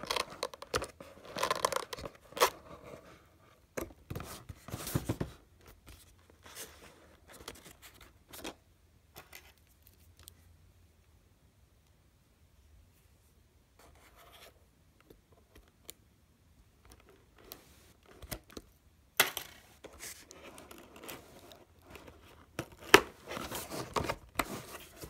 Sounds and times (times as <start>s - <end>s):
Inside, small room: 0.0s - 25.0s
Silence: 8.8s - 13.9s.